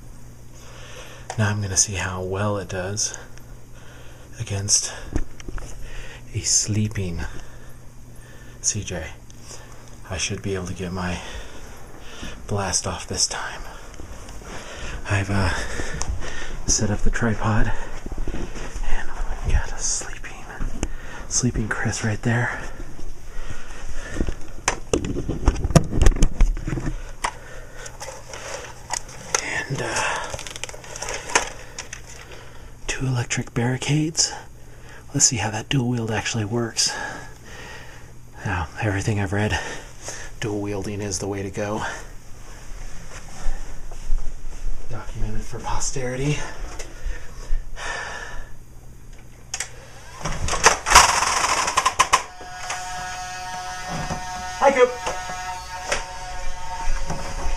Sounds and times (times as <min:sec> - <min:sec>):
Speech: 0:01.3 - 0:03.3, 0:04.4 - 0:05.1, 0:06.3 - 0:07.4, 0:08.6 - 0:09.2, 0:10.0 - 0:11.4, 0:12.5 - 0:13.8, 0:15.0 - 0:15.7, 0:16.7 - 0:17.9, 0:18.8 - 0:20.7, 0:21.3 - 0:22.8, 0:32.9 - 0:34.5, 0:35.1 - 0:37.2, 0:38.4 - 0:39.8, 0:40.4 - 0:42.1, 0:44.9 - 0:46.6, 0:54.6 - 0:55.0.